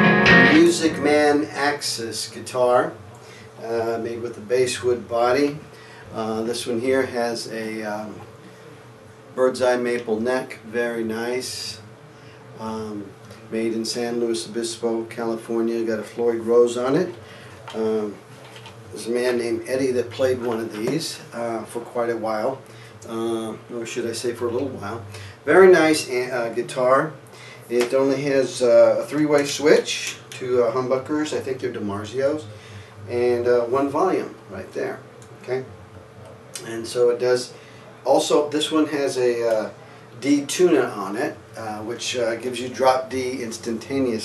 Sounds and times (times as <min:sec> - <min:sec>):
Speech: 0:00.5 - 0:08.3, 0:09.4 - 0:11.9, 0:12.6 - 0:18.2, 0:18.9 - 0:35.7, 0:36.6 - 0:44.2.